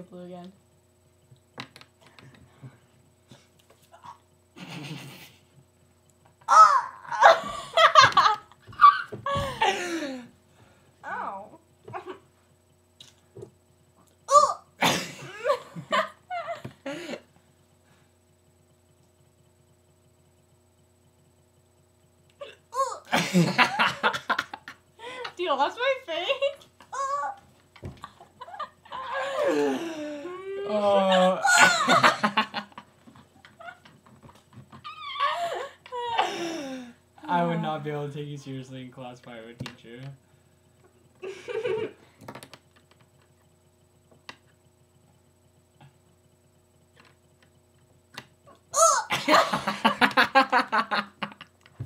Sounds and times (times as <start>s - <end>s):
Male speech, man speaking: 37.3s - 40.2s.